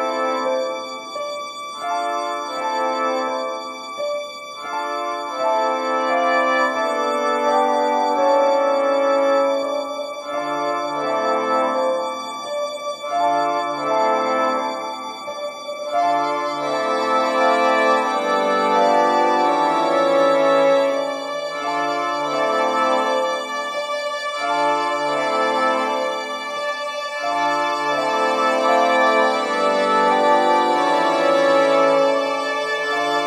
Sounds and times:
Music: 0.0s - 33.2s.

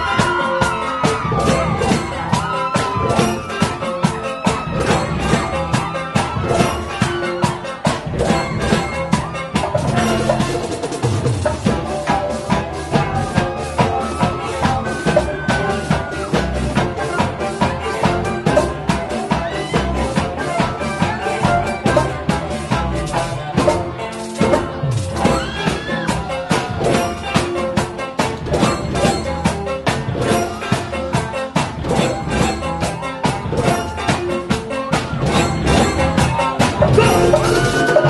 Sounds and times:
Maraca: 0.0s - 38.0s.

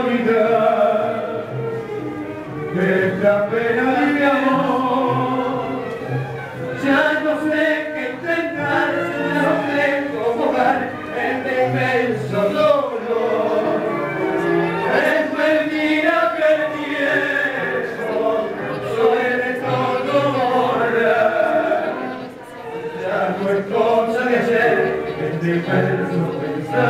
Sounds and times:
Male singing: 0.0s - 1.4s, 2.7s - 5.9s, 6.7s - 14.0s, 14.8s - 22.3s, 22.9s - 26.8s
Music: 0.0s - 26.8s
Speech: 16.5s - 26.8s.

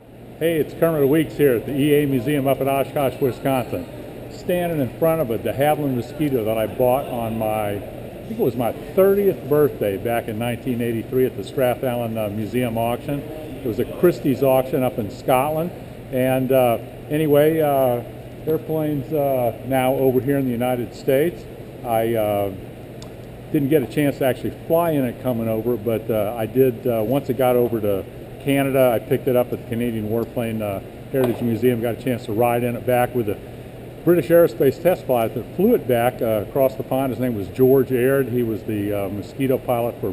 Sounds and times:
Speech: 0.4s - 22.6s, 23.5s - 33.4s, 34.1s - 40.1s.

